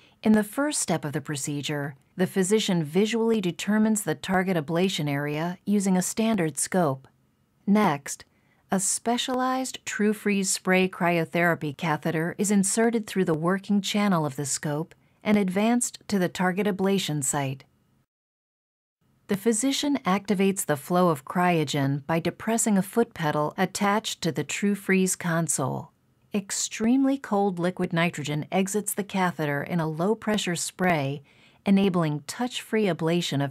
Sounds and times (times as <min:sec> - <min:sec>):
Speech: 0:00.2 - 0:07.1, 0:07.7 - 0:17.7, 0:19.3 - 0:33.5.